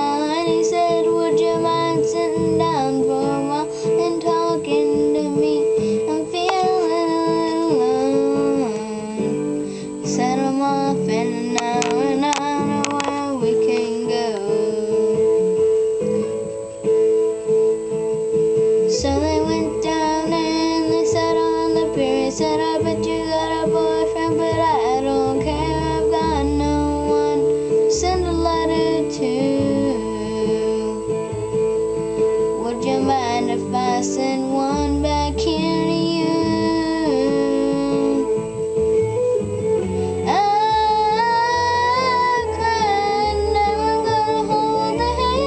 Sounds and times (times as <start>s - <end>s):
Child singing: 0.0s - 15.4s, 18.9s - 31.1s, 32.6s - 38.4s, 40.2s - 45.4s
Music: 0.0s - 45.4s.